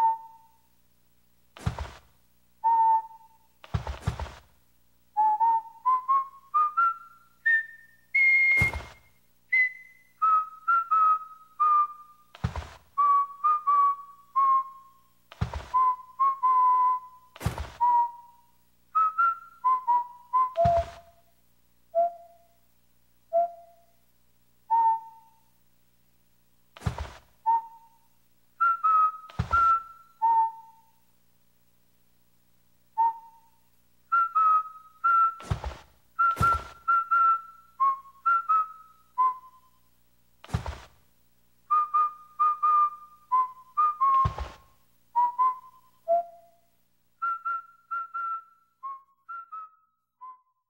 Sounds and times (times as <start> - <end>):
Whistling: 0.0 - 0.7, 2.6 - 4.4, 5.2 - 21.2, 21.9 - 22.6, 23.3 - 23.9, 24.7 - 25.5, 26.9 - 31.0, 33.0 - 39.8, 41.7 - 46.6, 47.2 - 50.7.